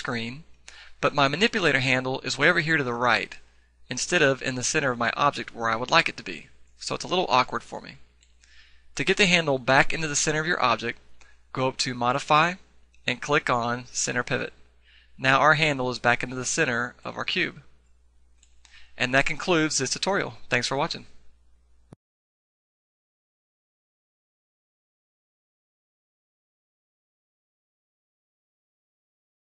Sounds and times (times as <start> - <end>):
Speech: 0.0 - 8.1, 9.0 - 14.6, 15.2 - 17.7, 19.0 - 21.2.